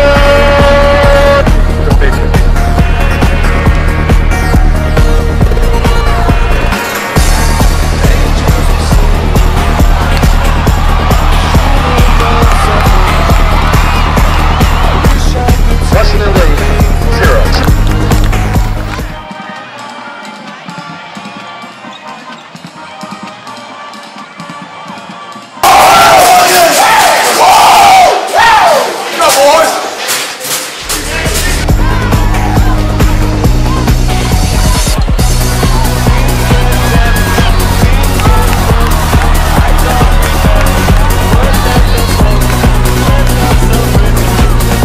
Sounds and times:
Crowd: 0.0 - 44.8.

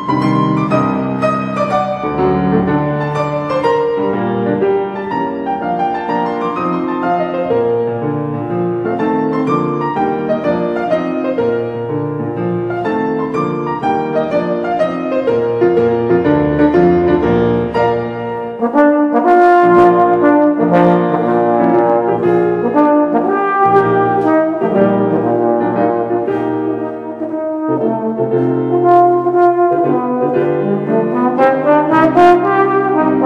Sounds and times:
Music: 0.0 - 33.2.

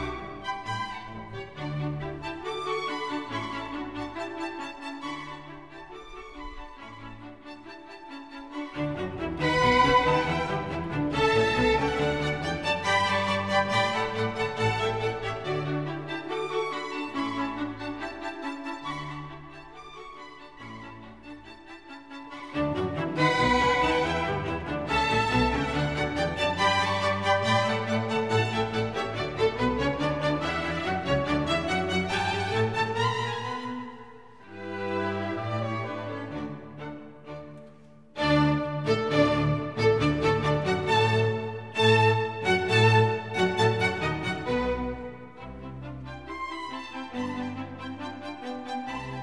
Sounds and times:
Music: 0.0 - 49.2.

